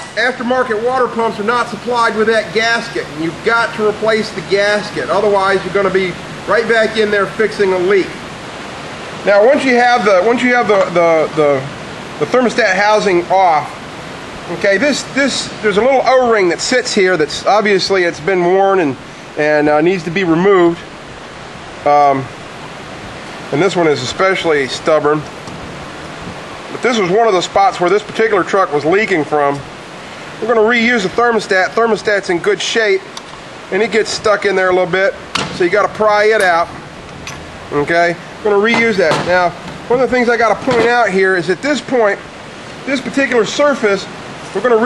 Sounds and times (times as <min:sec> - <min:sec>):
Speech: 0:00.0 - 0:08.2, 0:09.2 - 0:13.8, 0:14.5 - 0:20.9, 0:21.8 - 0:22.3, 0:23.5 - 0:25.3, 0:26.7 - 0:29.7, 0:30.4 - 0:33.1, 0:33.7 - 0:36.8, 0:37.7 - 0:42.2, 0:42.8 - 0:44.8.